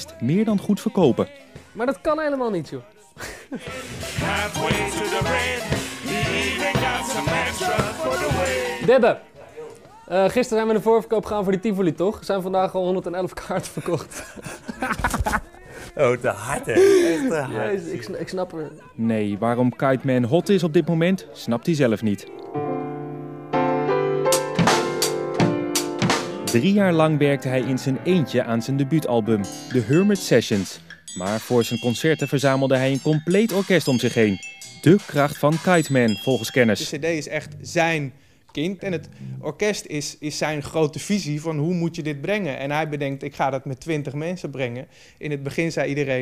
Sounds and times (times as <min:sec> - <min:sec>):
Speech: 0:00.0 - 0:03.0, 0:08.8 - 0:14.1, 0:15.3 - 0:22.3, 0:26.5 - 0:46.2
Music: 0:00.0 - 0:13.4, 0:16.9 - 0:38.0, 0:38.7 - 0:39.9.